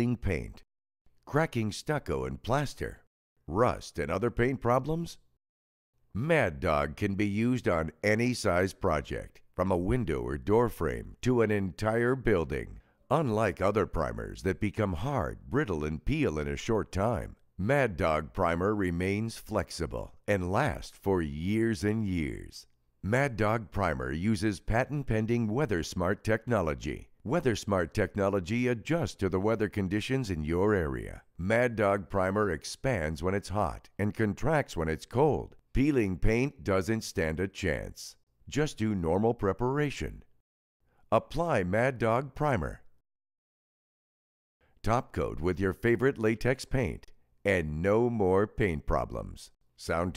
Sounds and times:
Speech: 0.0 - 5.3, 6.1 - 40.3, 41.1 - 42.9, 44.8 - 50.1.

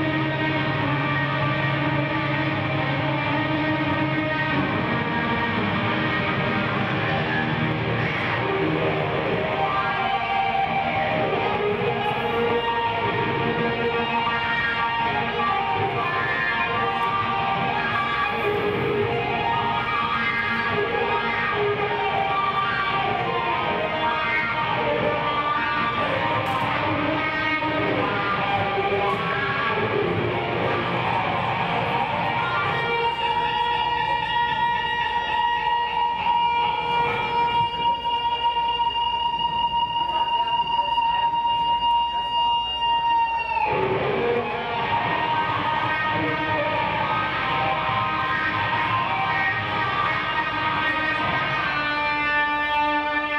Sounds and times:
Bass guitar: 0.0 - 53.3.

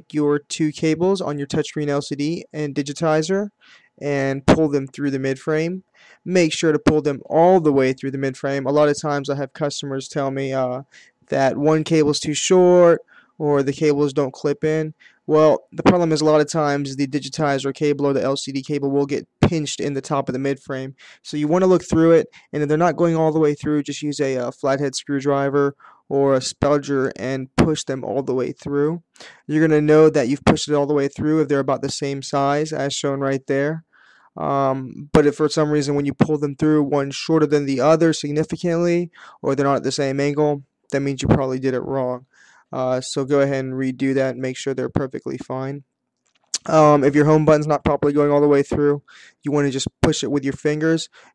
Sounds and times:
Speech: 0.0 - 45.9, 46.6 - 51.2.

